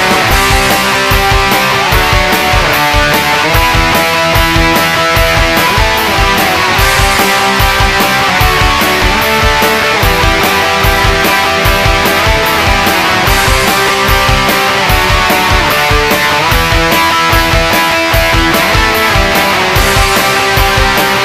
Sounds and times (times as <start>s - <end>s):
Music: 0.0s - 21.2s.